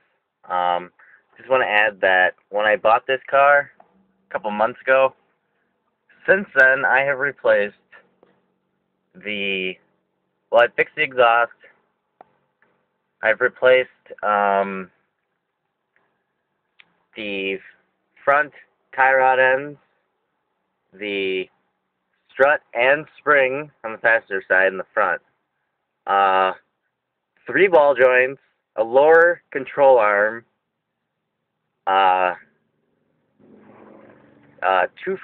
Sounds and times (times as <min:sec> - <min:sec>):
Speech: 0:00.4 - 0:05.2, 0:06.2 - 0:08.1, 0:09.2 - 0:09.9, 0:10.5 - 0:11.8, 0:13.2 - 0:15.0, 0:17.1 - 0:19.9, 0:20.9 - 0:21.6, 0:22.3 - 0:25.3, 0:26.0 - 0:26.7, 0:27.4 - 0:30.5, 0:31.8 - 0:32.4, 0:33.7 - 0:35.2.